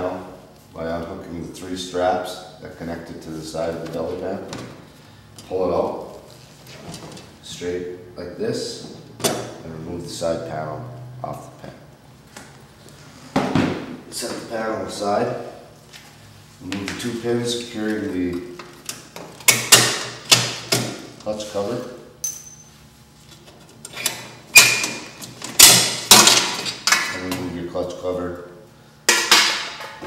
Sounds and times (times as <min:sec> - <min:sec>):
Speech: 0:00.0 - 0:04.6, 0:05.4 - 0:06.2, 0:07.4 - 0:09.0, 0:09.6 - 0:11.9, 0:14.1 - 0:15.5, 0:16.6 - 0:18.5, 0:21.2 - 0:22.1, 0:27.1 - 0:28.6.